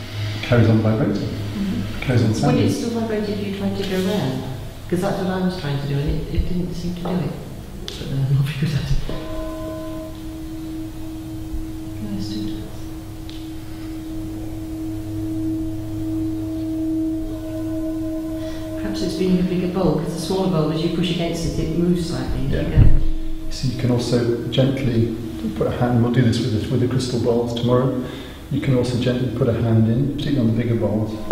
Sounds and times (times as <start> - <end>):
Speech: 0.4 - 9.1, 12.0 - 12.7, 18.8 - 31.3.